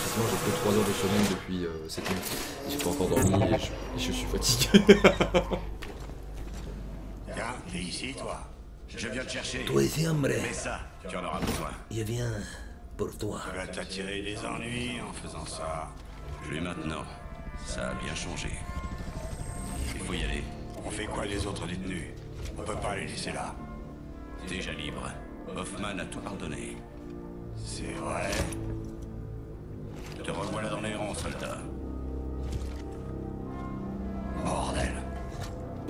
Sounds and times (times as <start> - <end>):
Speech: 0.1 - 4.8, 7.3 - 18.6, 19.9 - 23.6.